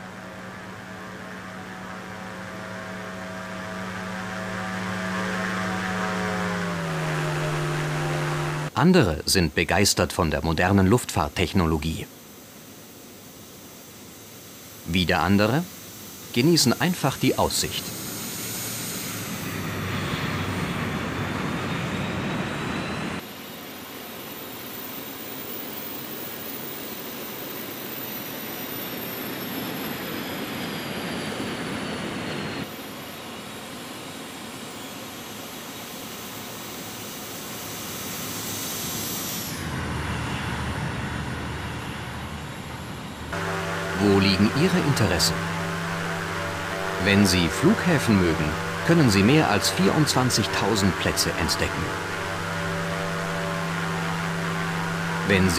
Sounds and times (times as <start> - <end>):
Jet engine: 0.0 - 8.8, 9.6 - 55.5.